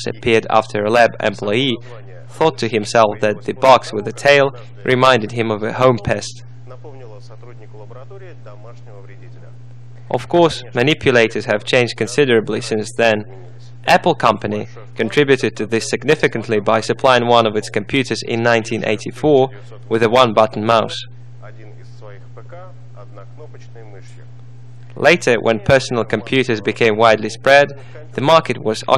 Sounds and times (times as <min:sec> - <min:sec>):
Speech: 0:00.0 - 0:24.4, 0:25.0 - 0:28.9.